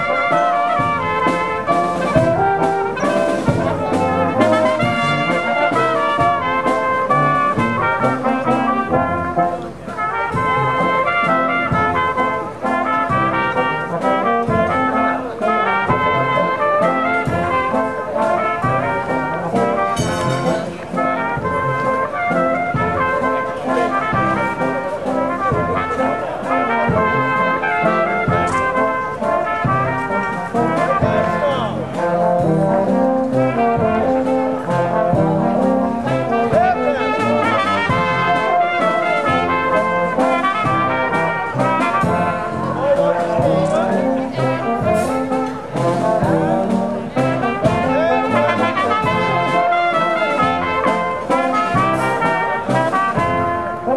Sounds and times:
Music: 0:00.0 - 0:53.9
Outside, urban or manmade: 0:00.0 - 0:53.9.

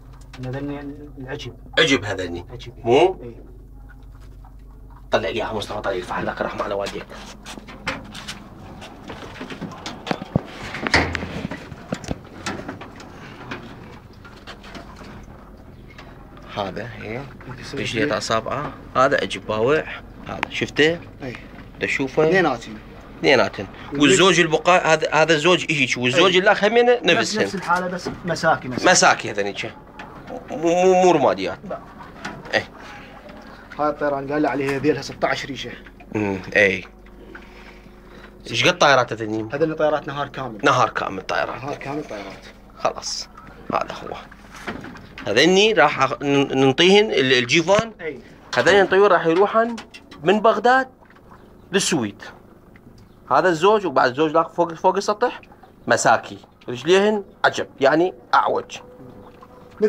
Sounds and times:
Speech: 0:00.4 - 0:03.5, 0:05.1 - 0:07.2, 0:16.5 - 0:29.8, 0:33.8 - 0:36.9, 0:38.5 - 0:44.3, 0:45.2 - 0:50.9, 0:51.7 - 0:52.4, 0:53.3 - 0:58.8.

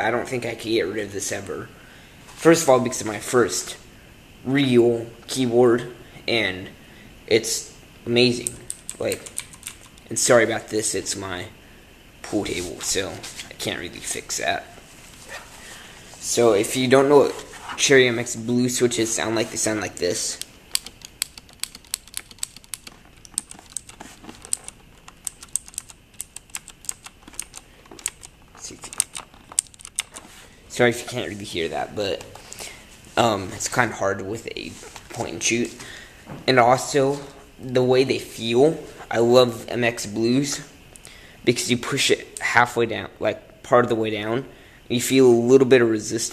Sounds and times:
Speech: 0:00.0 - 0:01.8, 0:02.4 - 0:09.3, 0:10.1 - 0:11.6, 0:12.2 - 0:14.8, 0:16.2 - 0:20.4, 0:28.6 - 0:29.0, 0:30.7 - 0:32.4, 0:33.2 - 0:40.8, 0:41.4 - 0:46.3
Computer keyboard: 0:08.4 - 0:10.1, 0:20.8 - 0:30.2.

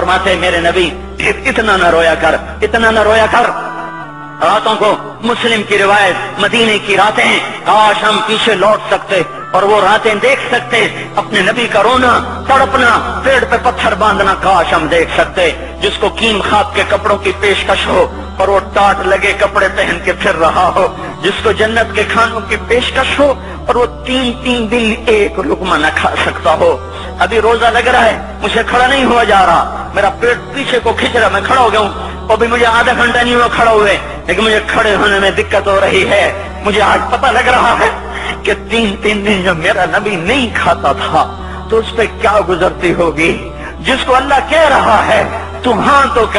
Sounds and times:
Speech: 0:00.0 - 0:03.7, 0:04.4 - 0:46.3
Music: 0:00.0 - 0:46.3.

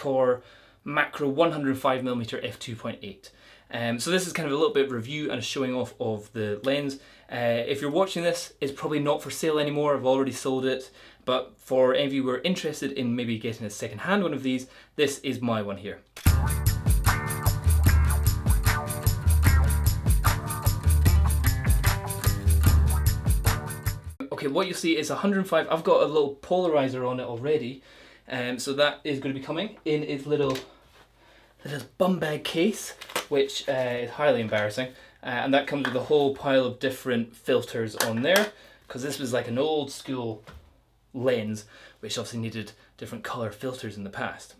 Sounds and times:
Speech: 0:00.0 - 0:16.1, 0:24.2 - 0:30.7, 0:31.6 - 0:40.5, 0:41.1 - 0:44.6
Music: 0:16.2 - 0:24.2.

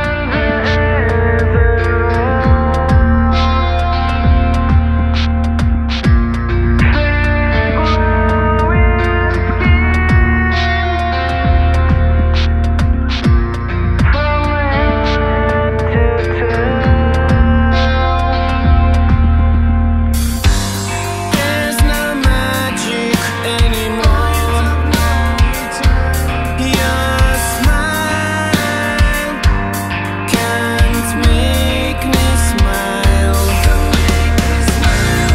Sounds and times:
Heavy metal: 0:00.0 - 0:35.3
Punk rock: 0:00.0 - 0:35.3.

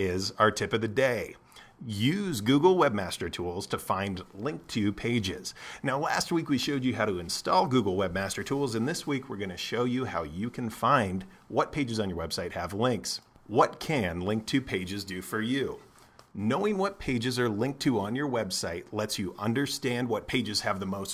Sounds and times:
Speech: 0:00.0 - 0:21.1.

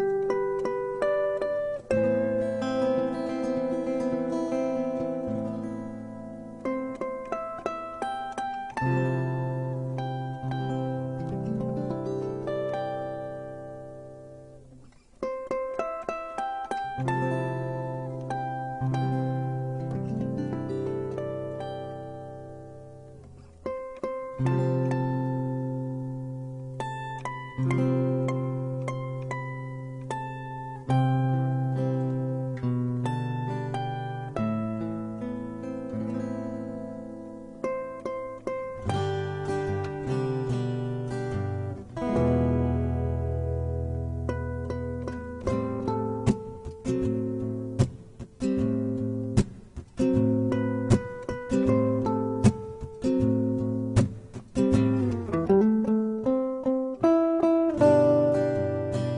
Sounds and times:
Music: 0:00.0 - 0:59.1.

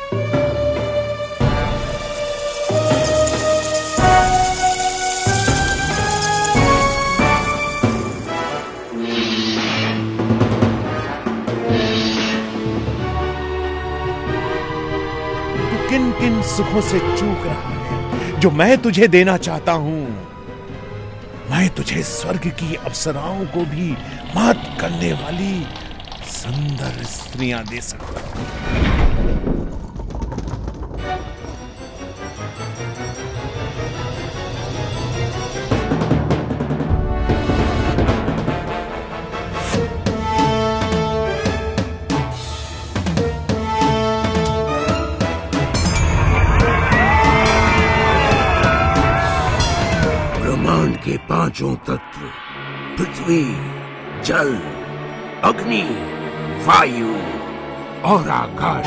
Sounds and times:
Theme music: 0:00.0 - 0:27.8, 0:31.1 - 0:58.8.

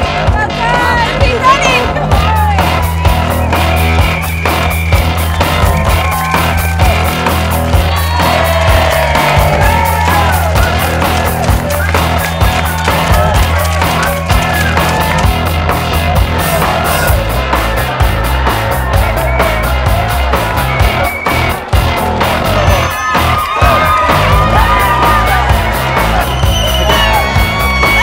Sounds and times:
Crowd: 0:00.0 - 0:28.0
Music: 0:00.0 - 0:28.0.

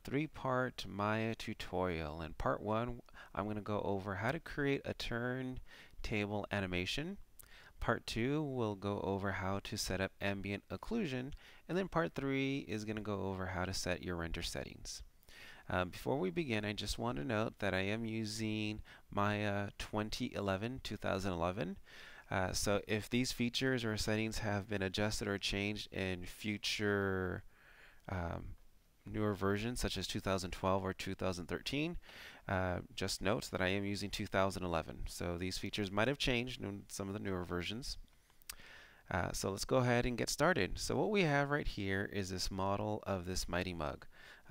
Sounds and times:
Speech: 0:00.0 - 0:07.2, 0:07.8 - 0:15.1, 0:15.7 - 0:27.4, 0:28.1 - 0:38.0, 0:39.1 - 0:44.5.

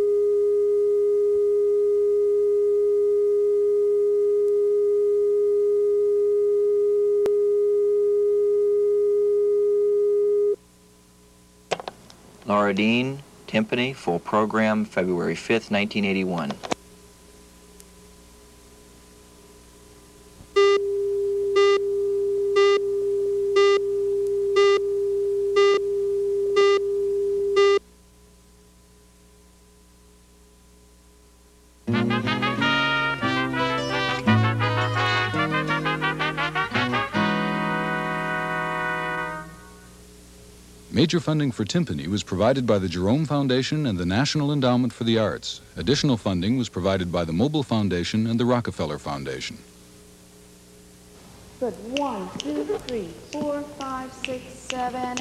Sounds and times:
Background music: 0:31.9 - 0:39.7.

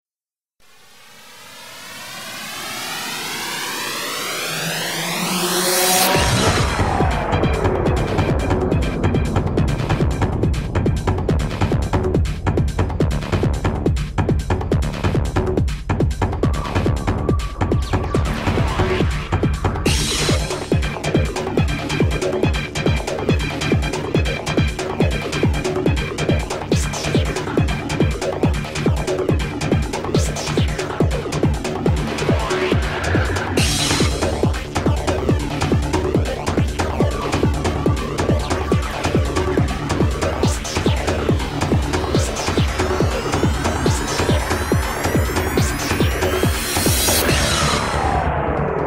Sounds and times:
Music: 0:00.6 - 0:48.8.

